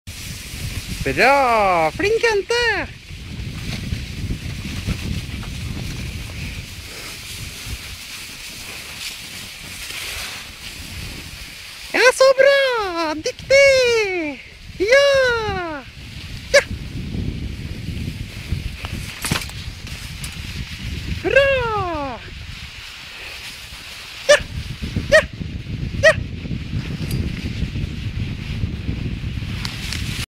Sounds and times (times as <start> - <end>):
Speech: 1.0 - 3.0, 11.9 - 15.9, 21.2 - 22.3.